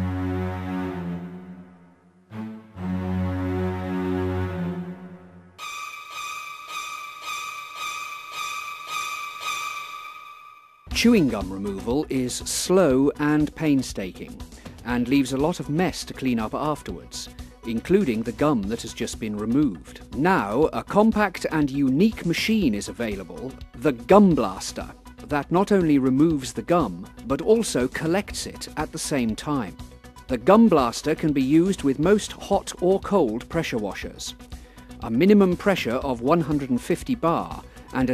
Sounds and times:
Music: 0.0 - 38.1
Speech: 10.9 - 34.4, 35.0 - 38.1.

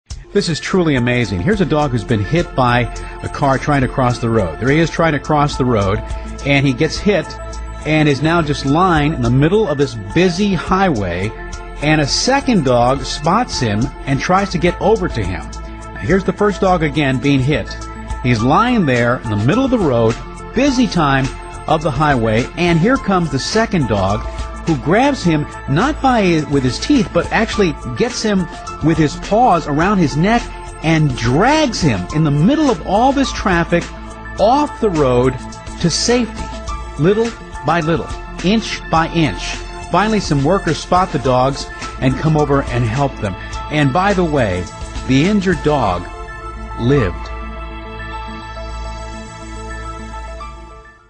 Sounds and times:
Music: 0.1 - 51.0
Speech: 0.4 - 36.4, 37.0 - 46.1, 46.8 - 47.3.

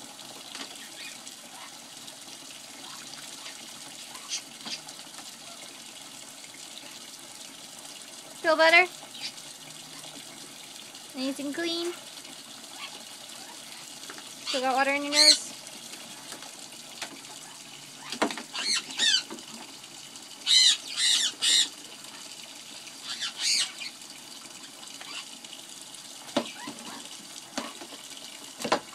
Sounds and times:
Sink (filling or washing): 0.0 - 28.9
Water: 0.0 - 28.9
Water tap, faucet: 0.0 - 28.9.

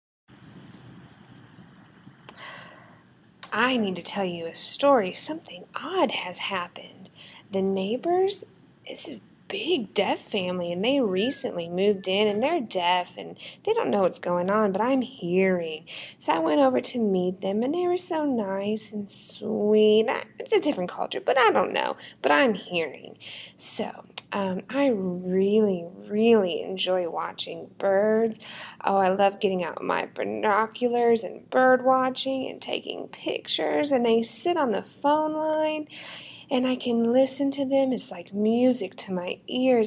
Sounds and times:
Speech: 3.4 - 39.8.

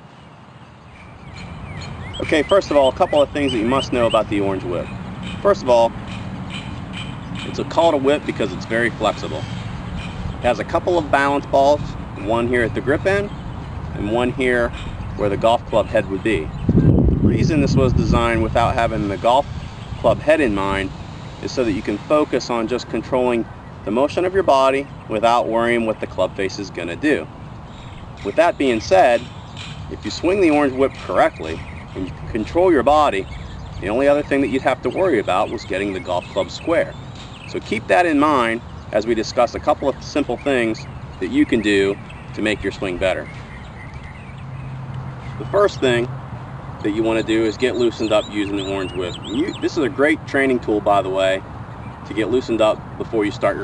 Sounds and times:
Speech: 2.2 - 6.0, 7.5 - 9.4, 10.4 - 13.3, 13.9 - 16.5, 17.3 - 27.3, 28.2 - 29.3, 29.9 - 43.3, 45.4 - 46.1, 46.8 - 51.4, 52.1 - 53.6.

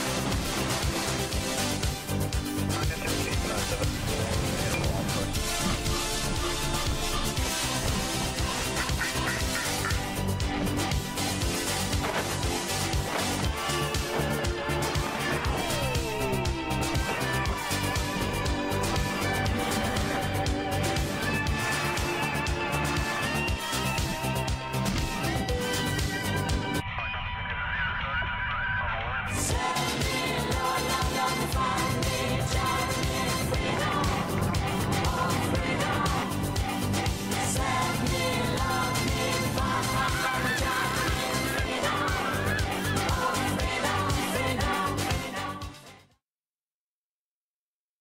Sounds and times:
Music: 0.0 - 46.2.

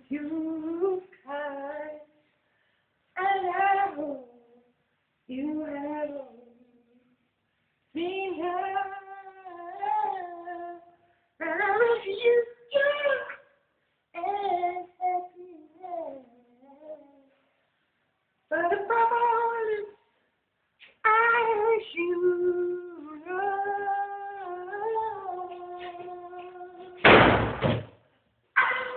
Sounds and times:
Male singing: 8.0 - 13.4, 21.1 - 27.0.

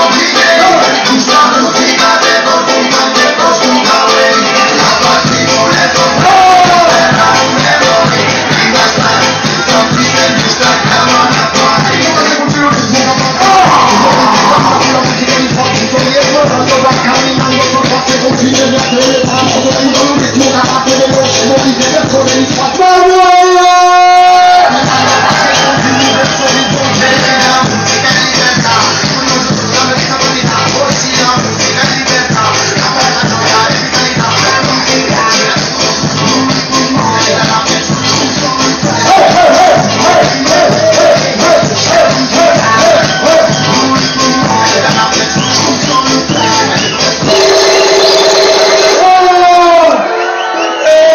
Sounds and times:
Music: 0.0 - 51.1.

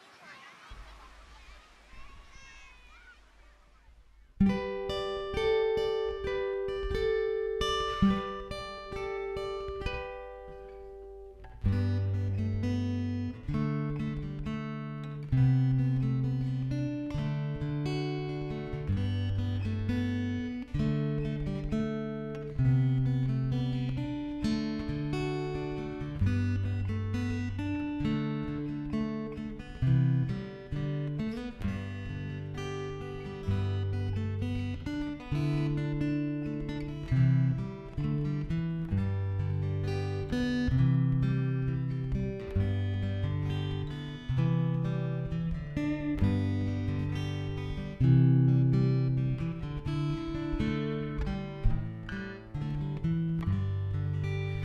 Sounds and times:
Acoustic guitar: 0.0 - 54.6.

